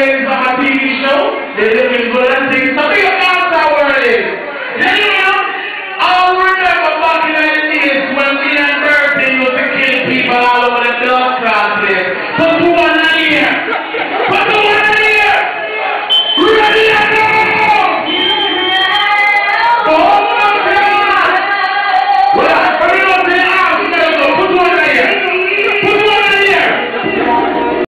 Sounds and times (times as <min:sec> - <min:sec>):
Speech: 0:00.0 - 0:13.7, 0:14.3 - 0:15.6, 0:16.4 - 0:18.2, 0:19.8 - 0:21.4, 0:22.4 - 0:27.6.